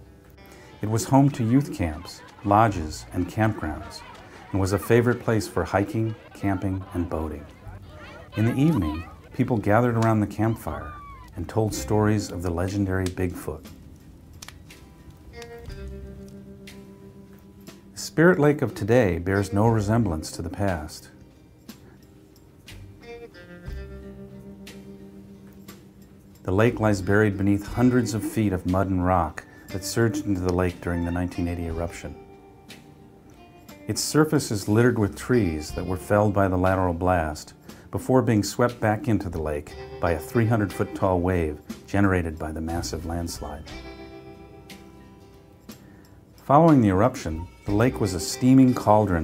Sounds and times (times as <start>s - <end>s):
Music: 0.0s - 49.2s
Speech: 0.8s - 13.7s, 18.0s - 21.1s, 26.5s - 32.2s, 33.9s - 43.7s, 46.4s - 49.2s.